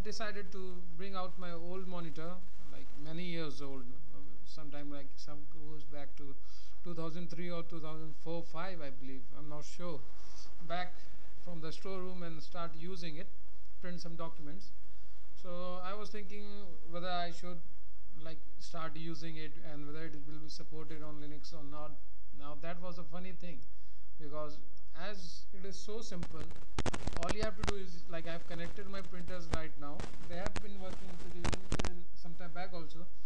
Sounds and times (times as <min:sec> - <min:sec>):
Speech: 0:00.0 - 0:10.0, 0:10.7 - 0:14.7, 0:15.4 - 0:17.6, 0:18.2 - 0:23.6, 0:24.2 - 0:26.5, 0:27.1 - 0:33.2.